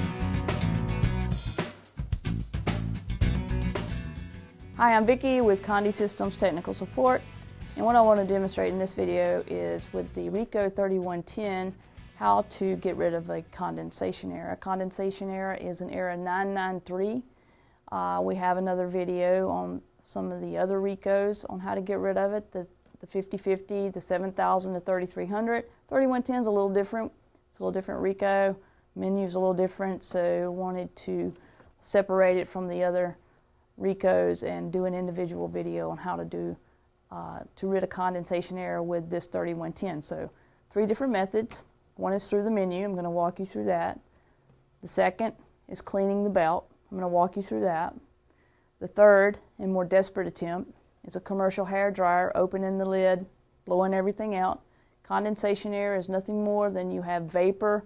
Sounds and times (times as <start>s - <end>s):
Speech: 4.8s - 17.3s, 17.9s - 33.2s, 33.8s - 44.0s, 44.8s - 48.1s, 48.8s - 57.8s.